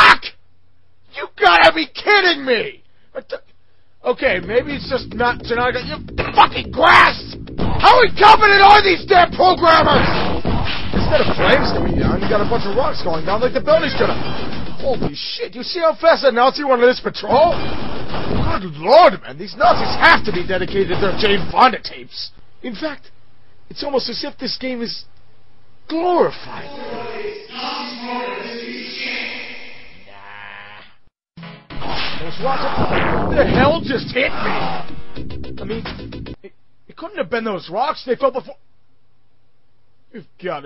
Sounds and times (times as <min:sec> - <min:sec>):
Speech: 0:00.0 - 0:00.4, 0:01.1 - 0:10.2, 0:11.0 - 0:14.2, 0:14.8 - 0:17.6, 0:18.4 - 0:23.1, 0:23.7 - 0:25.1, 0:25.9 - 0:29.4, 0:32.2 - 0:34.8, 0:35.6 - 0:38.6, 0:40.1 - 0:40.6
Music: 0:04.2 - 0:15.1, 0:26.6 - 0:29.8, 0:32.8 - 0:36.4.